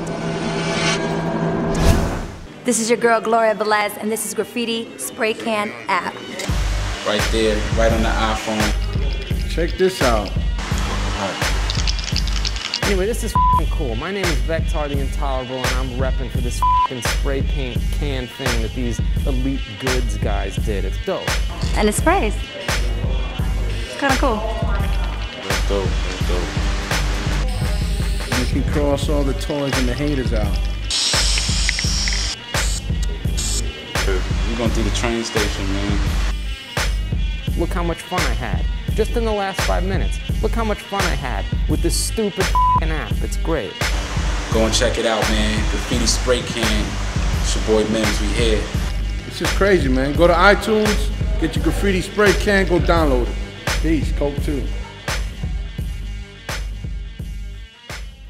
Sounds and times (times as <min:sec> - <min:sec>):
Music: 0:00.0 - 0:58.2
Speech: 0:07.1 - 0:08.8, 0:23.9 - 0:26.5, 0:28.3 - 0:30.6, 0:34.0 - 0:36.0, 0:44.5 - 0:48.7, 0:49.3 - 0:54.7
Spray: 0:30.9 - 0:33.6.